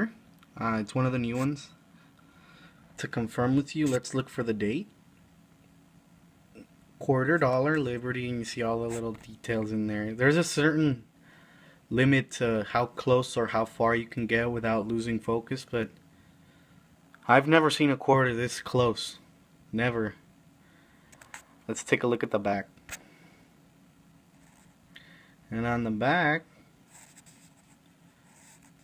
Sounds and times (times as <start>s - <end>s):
Speech: 0.0s - 1.8s, 3.0s - 4.9s, 7.0s - 11.1s, 11.9s - 16.0s, 17.2s - 20.2s, 21.7s - 22.7s, 25.5s - 26.5s.